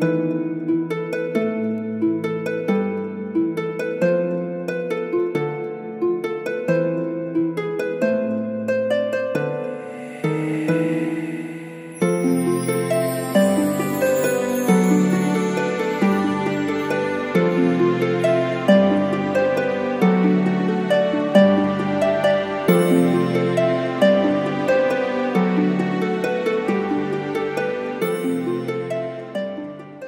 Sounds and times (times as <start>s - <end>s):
Music: 0.0s - 30.0s.